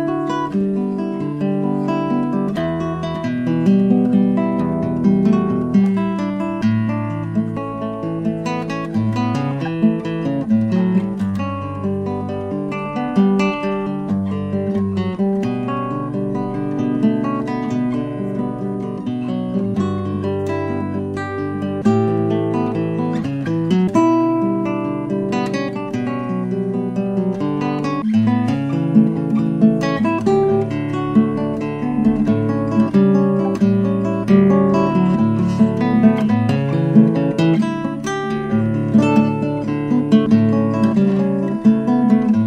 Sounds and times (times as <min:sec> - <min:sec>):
Strum: 0:00.0 - 0:42.4.